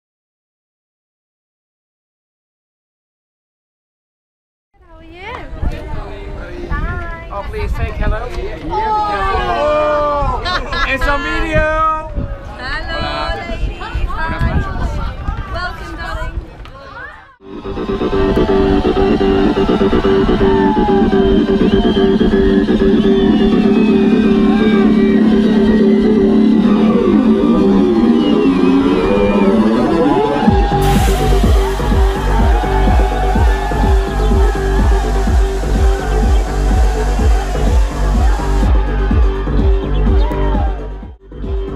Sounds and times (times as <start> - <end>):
Music: 17.4 - 41.7.